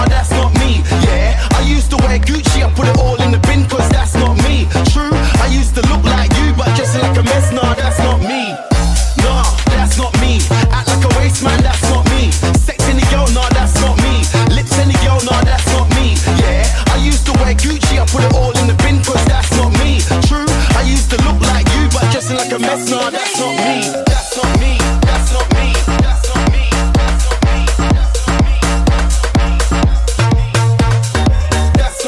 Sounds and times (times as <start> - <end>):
Afrobeat: 0.0 - 32.0.